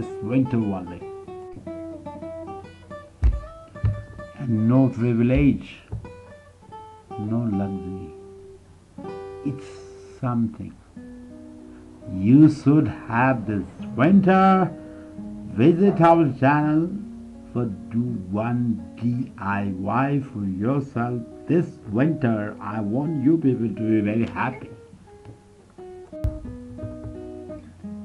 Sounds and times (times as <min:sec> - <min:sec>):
Speech: 0:00.0 - 0:01.1, 0:04.4 - 0:05.9, 0:07.2 - 0:08.2, 0:09.5 - 0:10.8, 0:12.1 - 0:14.8, 0:15.5 - 0:24.8
Strum: 0:00.0 - 0:28.0.